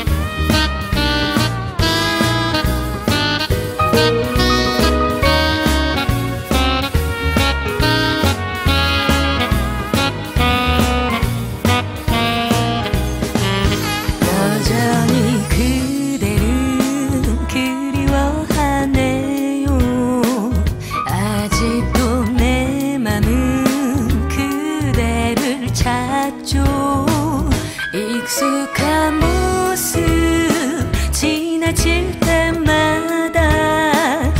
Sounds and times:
Music: 0:00.0 - 0:34.3.

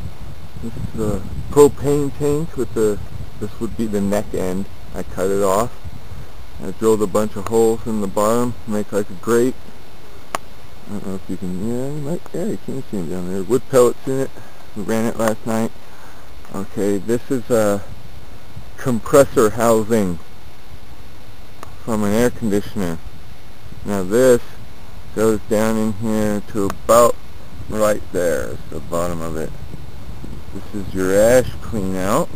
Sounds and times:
Speech: 0:00.6 - 0:05.8, 0:06.6 - 0:09.6, 0:10.9 - 0:15.8, 0:16.5 - 0:17.9, 0:18.8 - 0:20.2, 0:21.8 - 0:23.0, 0:23.8 - 0:24.6, 0:25.2 - 0:29.5, 0:30.6 - 0:32.3.

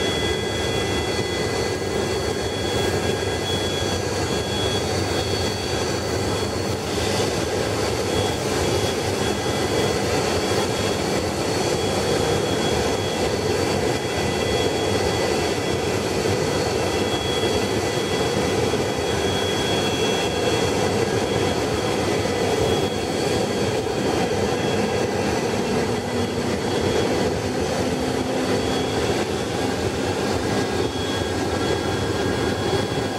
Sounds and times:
Aircraft: 0:00.0 - 0:33.1.

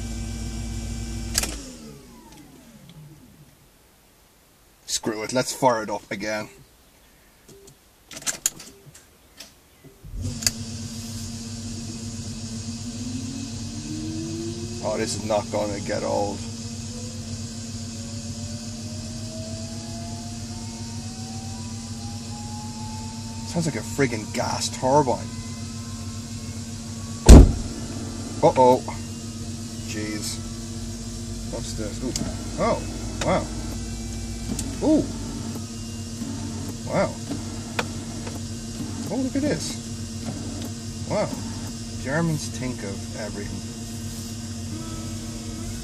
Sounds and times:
Engine: 0:00.0 - 0:03.7, 0:09.4 - 0:45.8
Car: 0:00.0 - 0:04.1, 0:07.6 - 0:45.8
Speech: 0:04.9 - 0:06.6, 0:14.8 - 0:16.5, 0:23.5 - 0:25.3, 0:28.4 - 0:29.0, 0:29.9 - 0:30.4, 0:31.5 - 0:33.6, 0:36.9 - 0:37.2, 0:39.1 - 0:39.8, 0:41.1 - 0:41.4, 0:42.0 - 0:43.7.

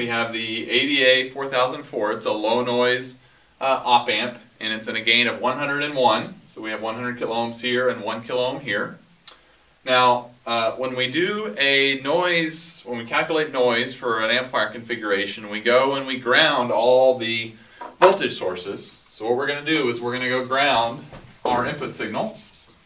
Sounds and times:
Speech: 0:00.0 - 0:09.0, 0:09.9 - 0:22.6.

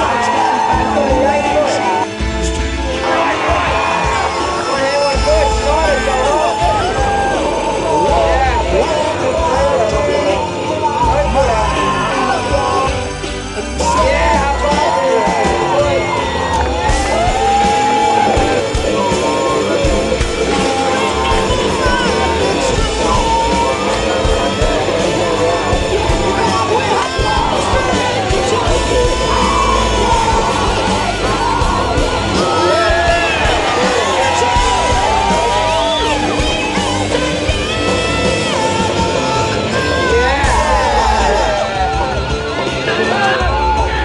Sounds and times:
Speech: 0:00.0 - 0:02.1, 0:04.6 - 0:13.0, 0:13.8 - 0:16.2, 0:17.1 - 0:30.6
Music: 0:00.0 - 0:44.0.

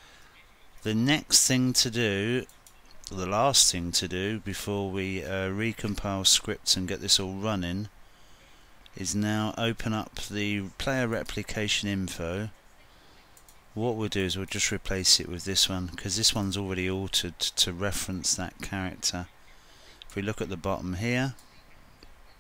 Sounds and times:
Speech: 0:00.8 - 0:02.5, 0:03.1 - 0:07.9, 0:09.0 - 0:12.6, 0:13.8 - 0:19.3, 0:20.1 - 0:21.4.

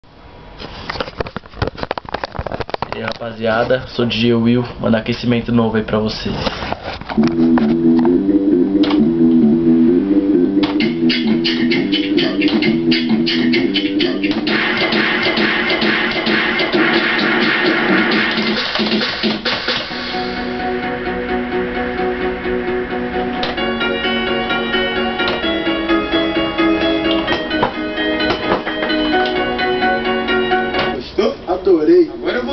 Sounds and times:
Speech: 0:02.9 - 0:06.5, 0:31.0 - 0:32.5
Sampler: 0:07.2 - 0:21.0.

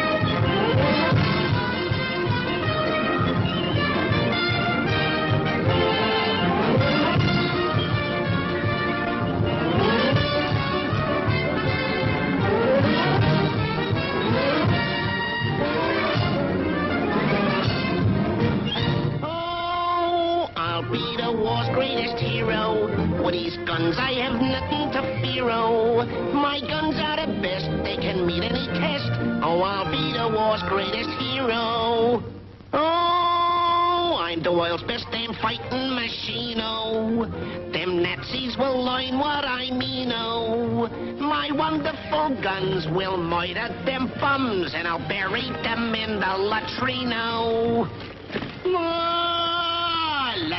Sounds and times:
Music: 0:00.0 - 0:50.5.

